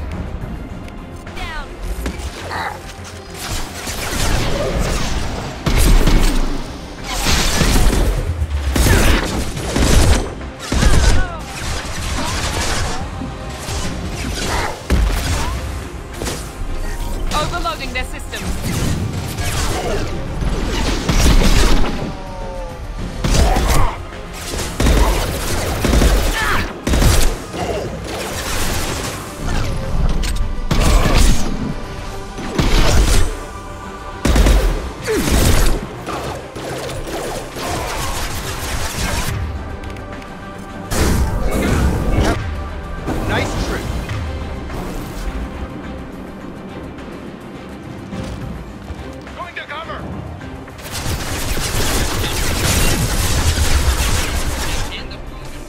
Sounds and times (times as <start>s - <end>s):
Music: 0.0s - 55.6s
Fusillade: 23.3s - 29.6s, 34.3s - 39.4s, 50.8s - 55.0s.